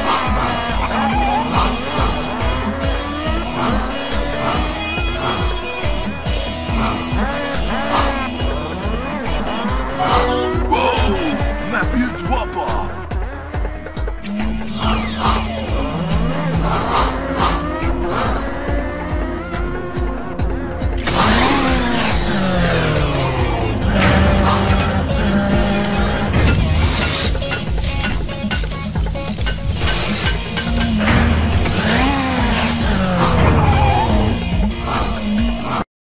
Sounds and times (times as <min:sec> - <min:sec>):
Music: 0:00.0 - 0:35.8
Vehicle: 0:00.0 - 0:35.8.